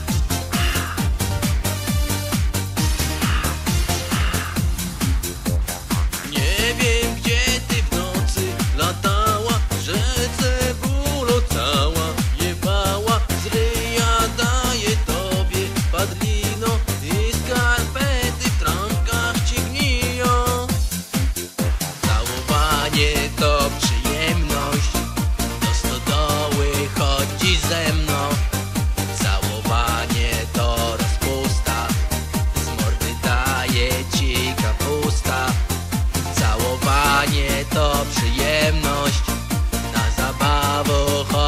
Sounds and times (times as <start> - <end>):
Music: 0.0 - 41.4.